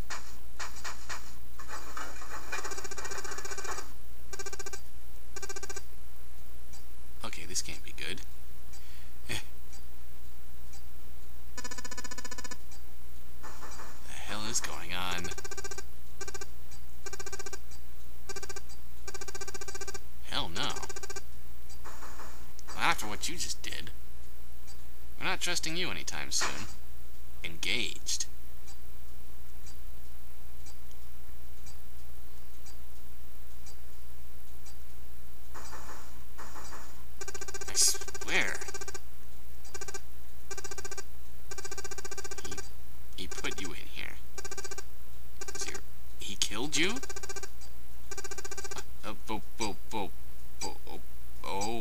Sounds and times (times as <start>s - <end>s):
Narration, monologue: 7.1s - 12.8s, 13.6s - 21.5s, 22.5s - 29.0s, 37.0s - 51.8s.